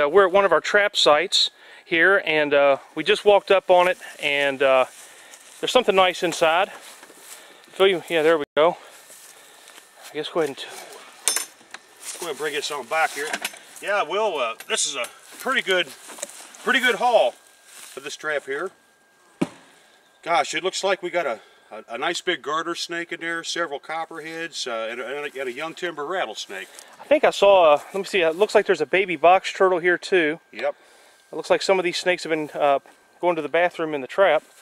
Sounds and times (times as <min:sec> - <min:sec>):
Speech: 0:00.0 - 0:04.9, 0:05.6 - 0:06.8, 0:07.8 - 0:08.8, 0:10.1 - 0:11.0, 0:12.2 - 0:16.0, 0:16.6 - 0:17.4, 0:18.0 - 0:18.8, 0:20.3 - 0:34.5.